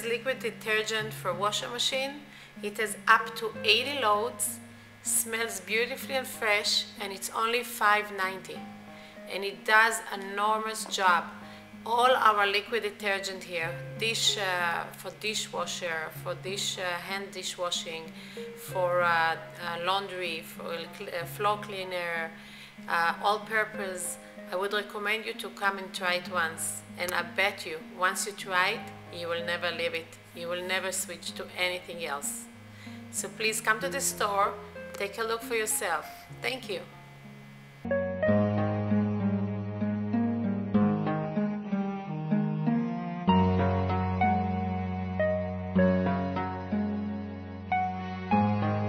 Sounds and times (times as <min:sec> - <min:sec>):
Speech: 0:00.0 - 0:08.6, 0:09.3 - 0:32.5, 0:33.2 - 0:36.9
Music: 0:00.0 - 0:48.8.